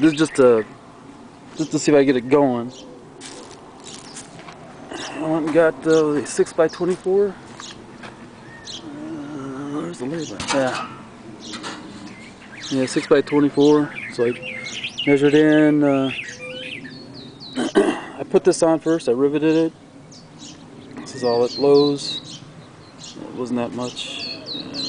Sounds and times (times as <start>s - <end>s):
Speech: 0.0s - 0.7s, 1.6s - 2.8s, 5.0s - 7.4s, 8.9s - 11.0s, 12.7s - 14.4s, 15.1s - 16.2s, 18.2s - 19.8s, 21.0s - 22.2s, 23.2s - 24.3s
Wind: 0.0s - 24.8s.